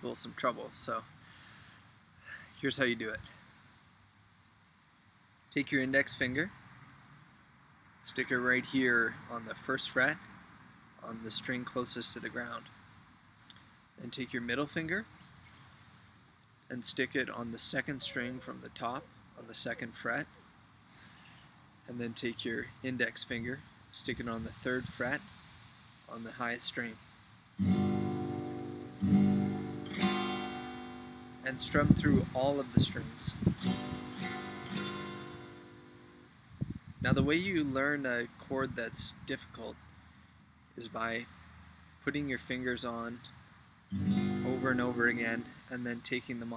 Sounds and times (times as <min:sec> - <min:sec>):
Speech: 0:00.0 - 0:01.1, 0:02.3 - 0:03.4, 0:05.5 - 0:06.6, 0:08.0 - 0:10.2, 0:11.0 - 0:12.7, 0:14.0 - 0:15.1, 0:16.7 - 0:20.4, 0:21.9 - 0:25.3, 0:26.1 - 0:27.0, 0:31.4 - 0:33.4, 0:37.0 - 0:39.8, 0:40.8 - 0:41.3, 0:42.0 - 0:43.3, 0:44.4 - 0:46.5
Strum: 0:27.6 - 0:36.3, 0:43.9 - 0:45.5.